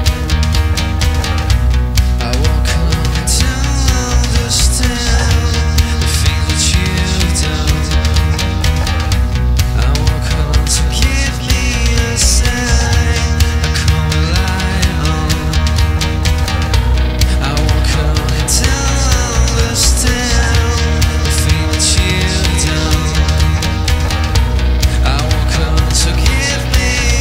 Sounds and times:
Drum: 0:00.0 - 0:27.2
Drum kit: 0:00.0 - 0:27.2.

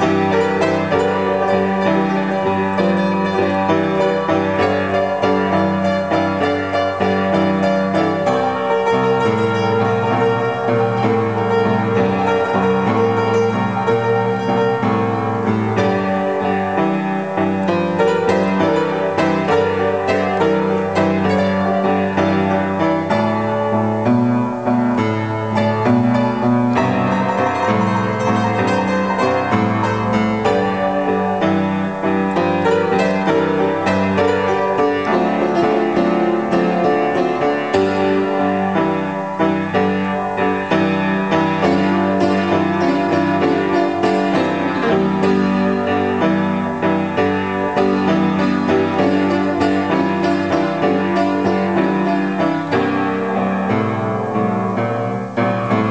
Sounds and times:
Blues: 0:00.0 - 0:55.9.

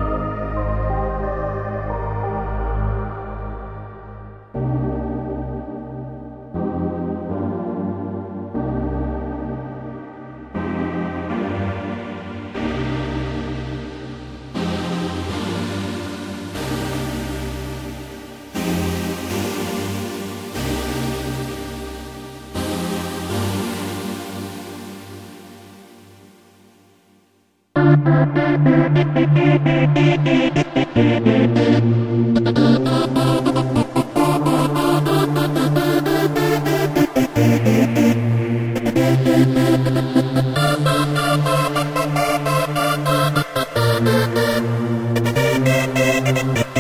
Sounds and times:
Music: 0:00.0 - 0:46.8.

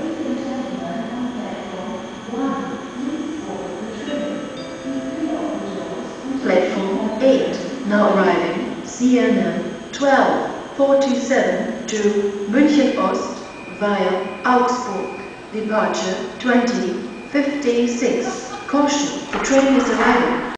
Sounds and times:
Speech: 0:00.0 - 0:20.5.

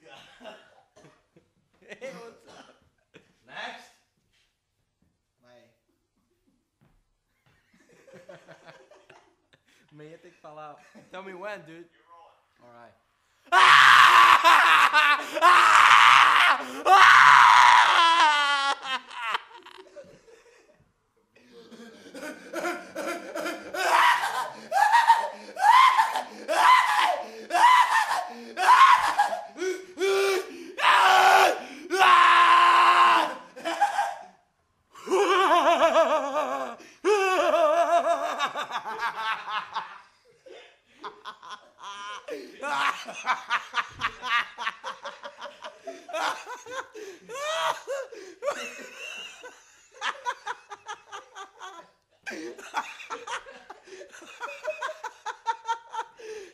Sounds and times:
Snicker: 0:07.7 - 0:09.9, 0:18.5 - 0:20.8, 0:37.4 - 0:56.5.

